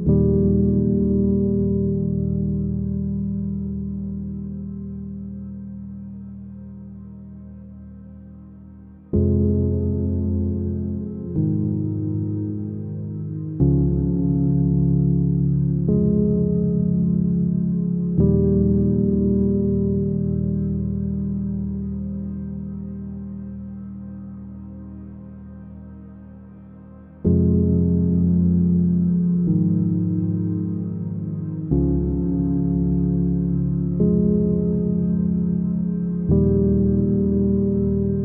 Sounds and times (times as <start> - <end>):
Music: 0.0 - 38.2.